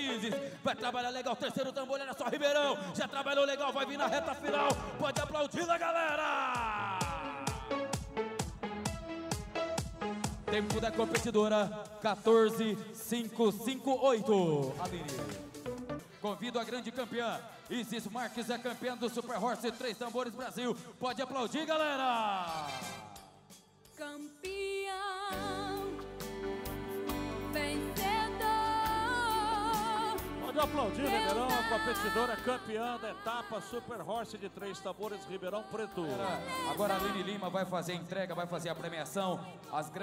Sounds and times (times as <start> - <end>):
Music: 0.0 - 1.8, 2.9 - 40.0
Speech: 0.0 - 7.7, 10.5 - 15.4, 16.2 - 23.0, 30.4 - 40.0.